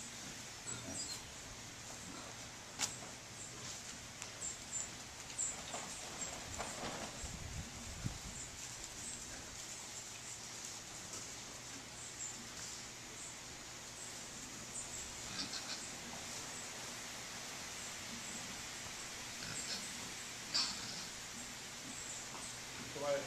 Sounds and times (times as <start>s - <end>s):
Oink: 0.6s - 1.2s, 15.2s - 15.9s, 19.4s - 21.2s.